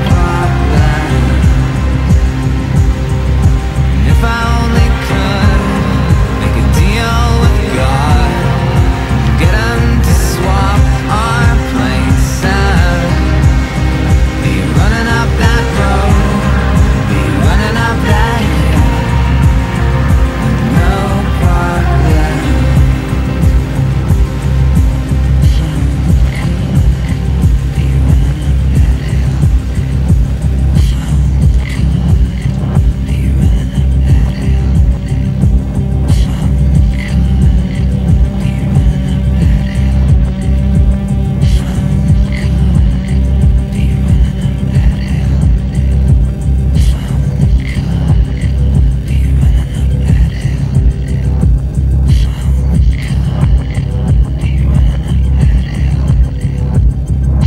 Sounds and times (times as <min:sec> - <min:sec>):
Music: 0:00.0 - 0:57.4.